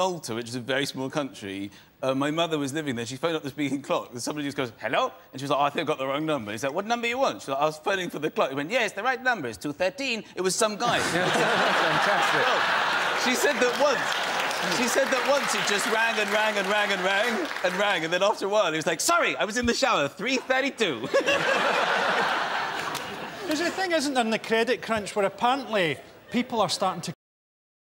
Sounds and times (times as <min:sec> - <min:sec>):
Speech: 0:00.0 - 0:12.6, 0:13.2 - 0:21.0, 0:23.4 - 0:27.2.